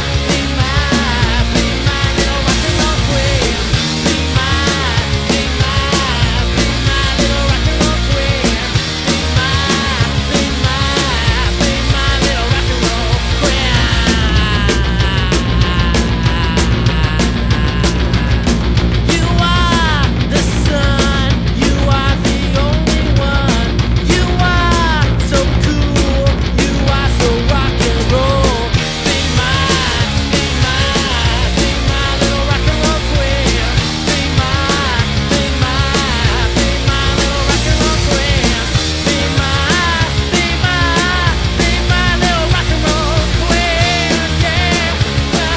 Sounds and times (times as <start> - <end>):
Rock and roll: 0.0 - 45.5.